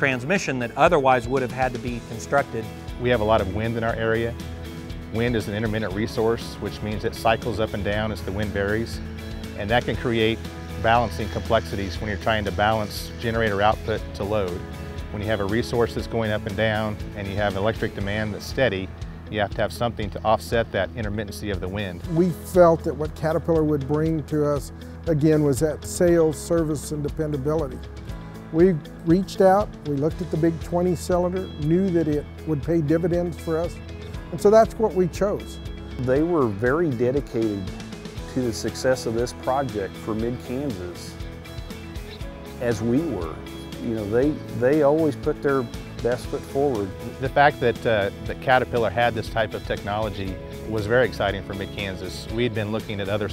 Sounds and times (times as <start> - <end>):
Speech: 0.0 - 4.4, 5.1 - 9.0, 9.6 - 27.8, 28.6 - 33.8, 34.4 - 37.7, 38.3 - 41.2, 42.6 - 53.3
Music: 0.0 - 53.3.